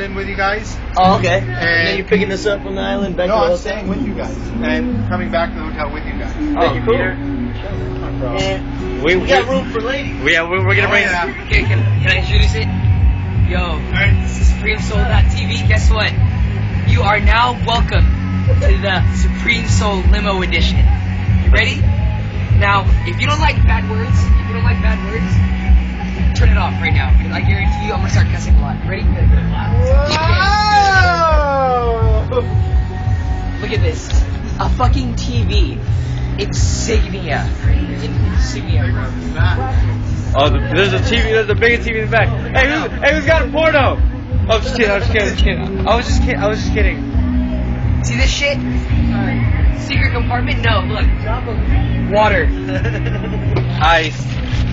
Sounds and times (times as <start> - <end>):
Music: 0.0 - 54.7.